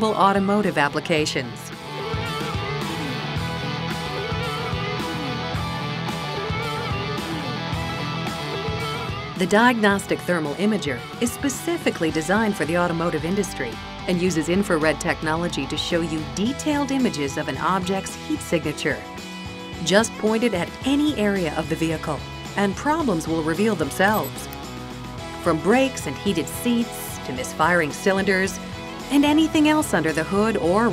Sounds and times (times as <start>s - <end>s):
Speech: 0.0s - 1.7s, 9.4s - 19.1s, 19.8s - 24.5s, 25.4s - 30.9s
Music: 0.0s - 30.9s.